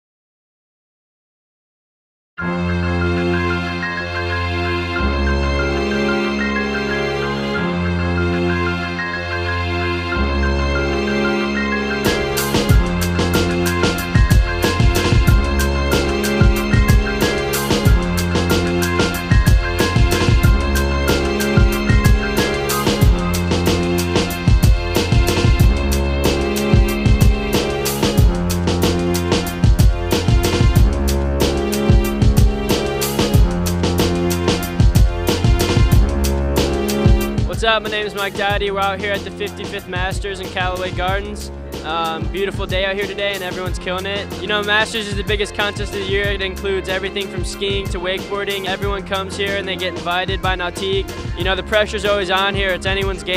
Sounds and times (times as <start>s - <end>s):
Music: 2.4s - 53.3s.